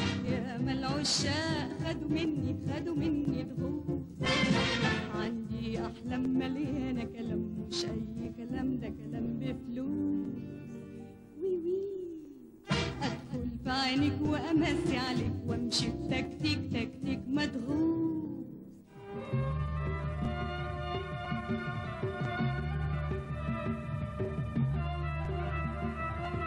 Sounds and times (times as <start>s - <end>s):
Music: 0.0s - 26.4s.